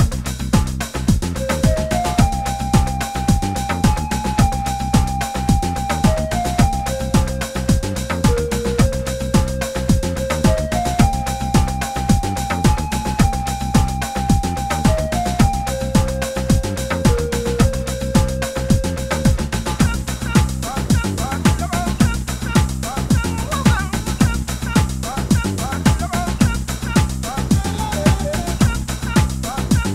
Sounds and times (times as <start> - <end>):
Music: 0.0 - 29.9.